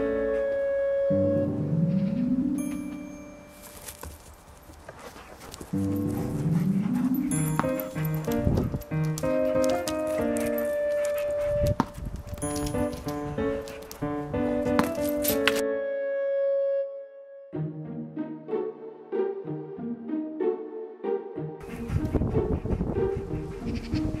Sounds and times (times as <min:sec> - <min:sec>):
Music: 0:00.0 - 0:04.0, 0:05.8 - 0:24.2
Outside, urban or manmade: 0:00.0 - 0:24.2
Canidae, dogs, wolves: 0:04.9 - 0:12.0.